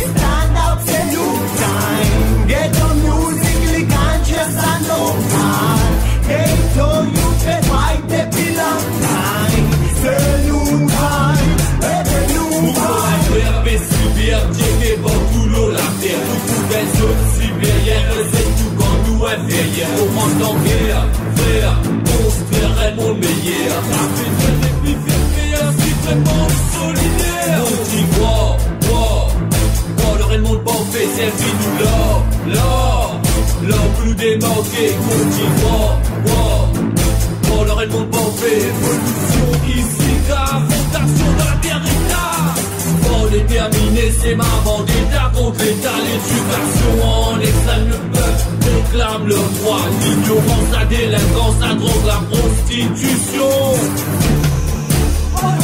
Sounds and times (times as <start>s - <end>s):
Rhythm and blues: 0.0s - 55.6s.